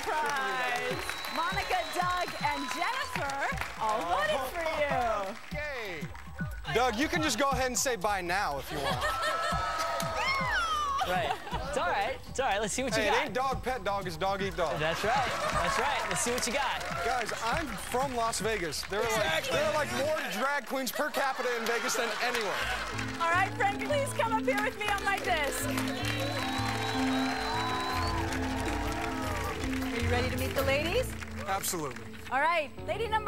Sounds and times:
Music: 0:00.0 - 0:33.2.

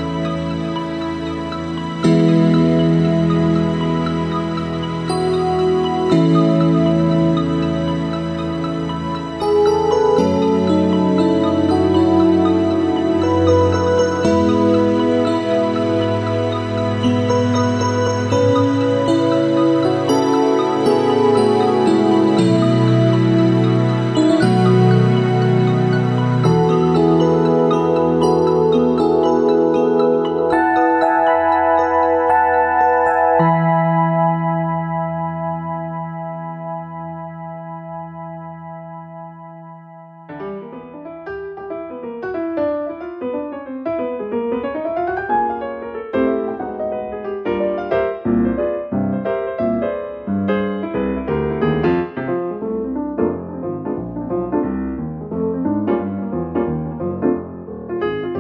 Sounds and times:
Marimba, xylophone: 0:00.0 - 0:36.9
Glockenspiel: 0:00.0 - 0:40.3.

